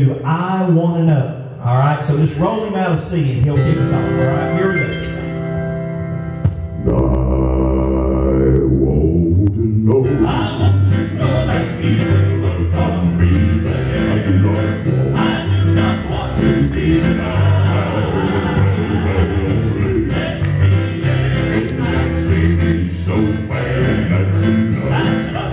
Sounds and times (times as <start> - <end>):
Gospel music: 0.0 - 25.5
Singing: 6.8 - 25.5.